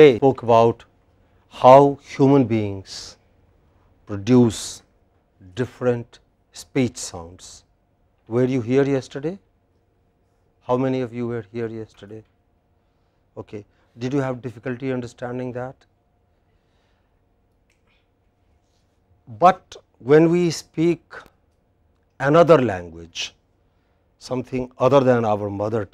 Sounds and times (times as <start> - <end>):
Speech: 0.0 - 0.9, 1.5 - 3.2, 4.1 - 7.7, 8.3 - 9.4, 10.6 - 12.3, 13.4 - 15.9, 19.3 - 21.3, 22.2 - 23.4, 24.2 - 25.9.